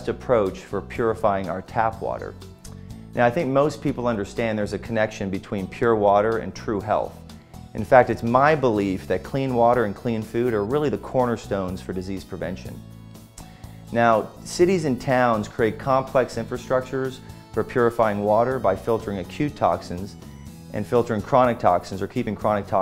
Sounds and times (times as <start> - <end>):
Speech: 0.0 - 2.4, 3.2 - 7.2, 7.8 - 12.8, 13.9 - 20.2, 20.8 - 22.8
Music: 0.0 - 22.8.